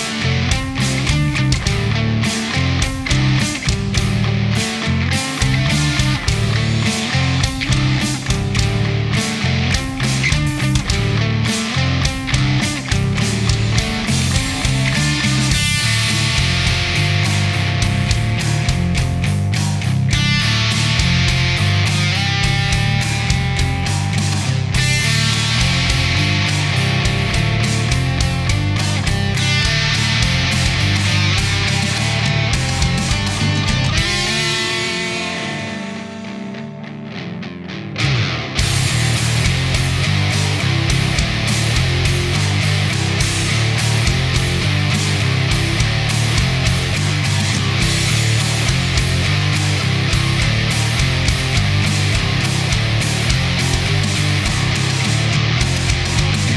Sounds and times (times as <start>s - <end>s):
Grunge: 0.0s - 56.5s
Heavy metal: 0.0s - 56.5s
Progressive rock: 0.0s - 56.5s.